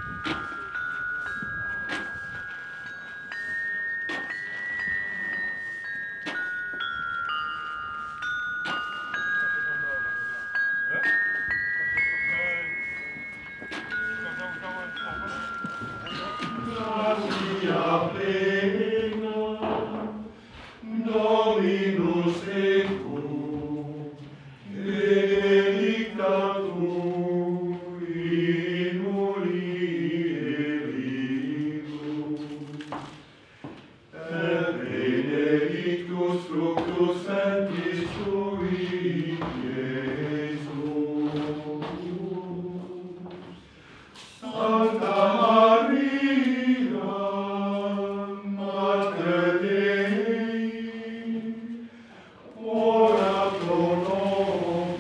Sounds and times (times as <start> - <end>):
Jingle bell: 0.0 - 17.4
Speech: 9.4 - 10.2, 14.1 - 15.5.